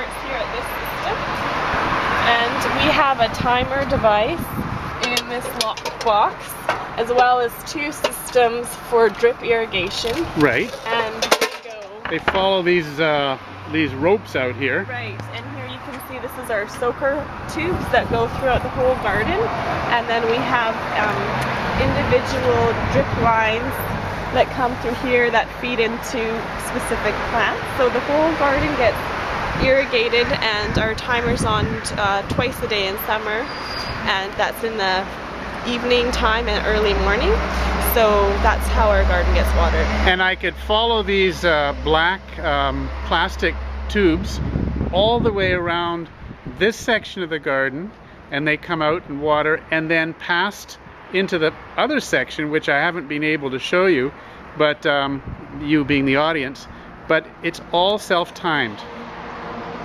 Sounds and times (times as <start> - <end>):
Speech: 2.2 - 23.8, 24.4 - 29.0, 29.6 - 33.5, 34.1 - 35.1, 35.7 - 44.4, 45.0 - 58.8.